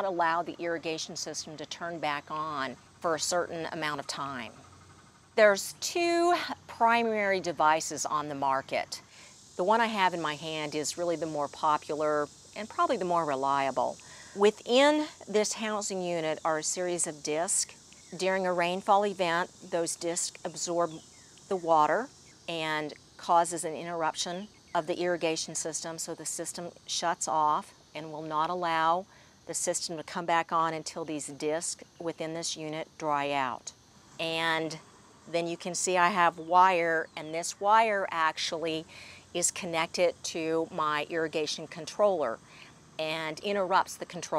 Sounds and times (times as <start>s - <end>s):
Speech: 0.0s - 4.6s, 5.4s - 9.0s, 9.6s - 42.4s, 43.0s - 44.3s.